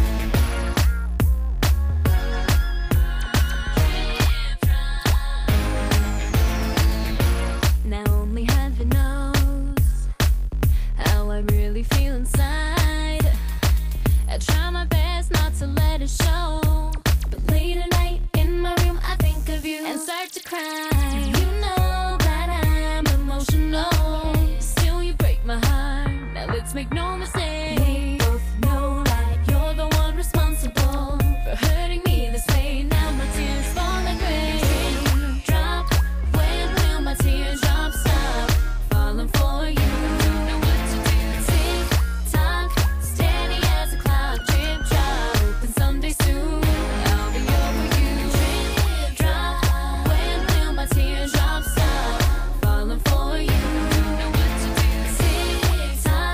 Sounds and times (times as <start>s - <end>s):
Music: 0.0s - 56.3s.